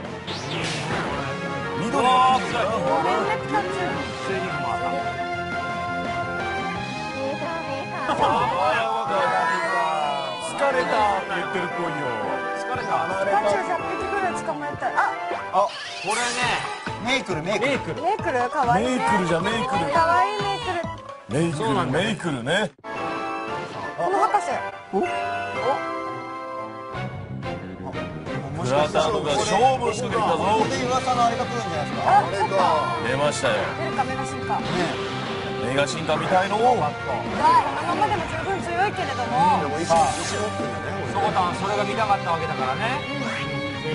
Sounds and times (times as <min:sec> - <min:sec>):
Music: 0:00.0 - 0:43.9.